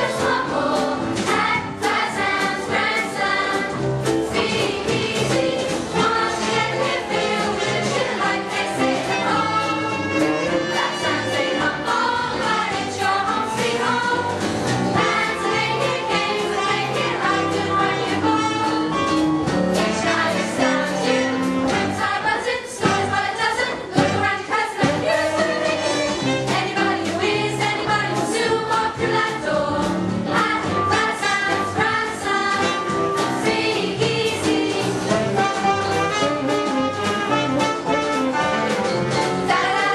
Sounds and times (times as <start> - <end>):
Music: 0.0 - 39.9.